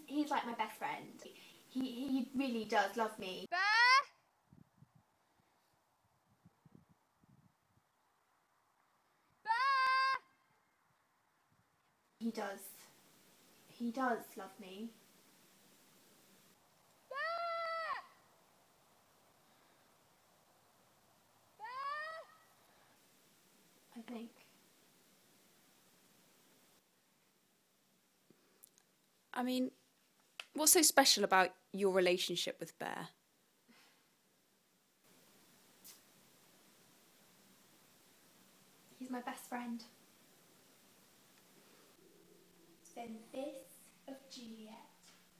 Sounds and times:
Speech: 0:00.0 - 0:03.5, 0:12.2 - 0:12.9, 0:13.7 - 0:15.0, 0:29.4 - 0:29.8, 0:30.5 - 0:33.2, 0:39.0 - 0:40.0, 0:42.9 - 0:45.0.

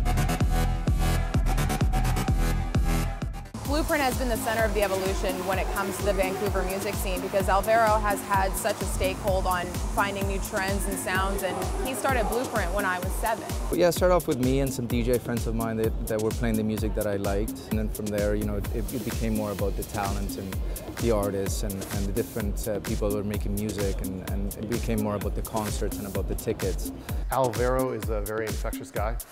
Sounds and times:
Music: 0:00.0 - 0:29.3
Speech: 0:03.7 - 0:29.2.

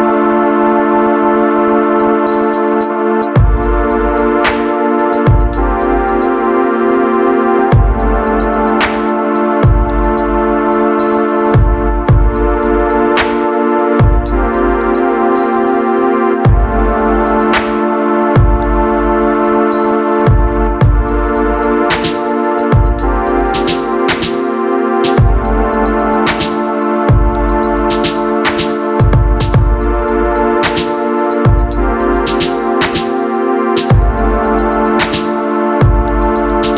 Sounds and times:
Music: 0:00.0 - 0:36.7.

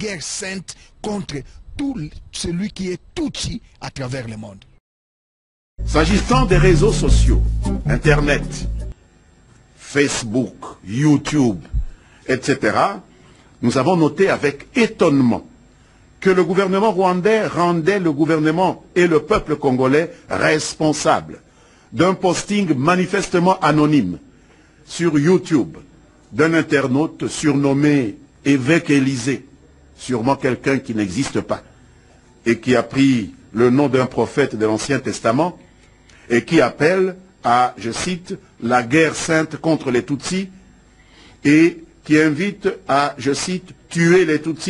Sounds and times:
Speech: 0:00.0 - 0:04.8, 0:05.8 - 0:08.7, 0:09.8 - 0:15.6, 0:16.2 - 0:31.7, 0:32.4 - 0:35.6, 0:36.3 - 0:40.6, 0:41.4 - 0:44.7.

